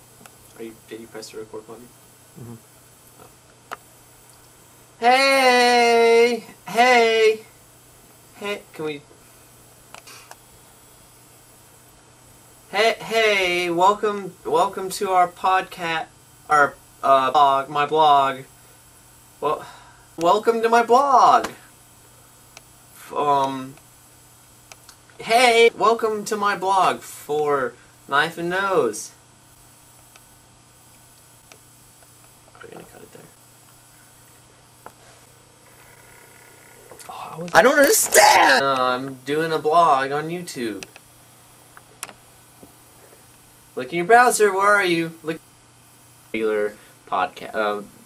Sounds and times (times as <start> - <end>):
Speech: 0.6 - 2.6, 5.0 - 7.5, 8.4 - 9.1, 12.7 - 18.5, 25.2 - 29.2, 32.6 - 33.4, 37.1 - 40.9, 43.8 - 45.4, 46.3 - 48.0.